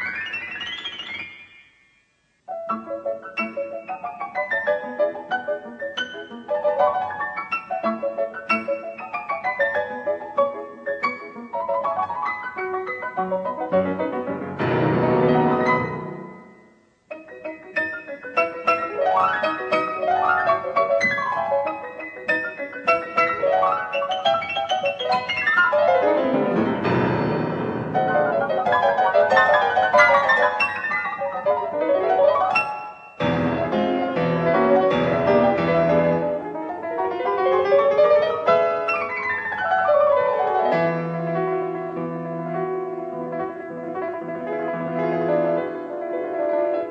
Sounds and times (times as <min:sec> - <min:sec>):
Music: 0:00.0 - 0:46.9.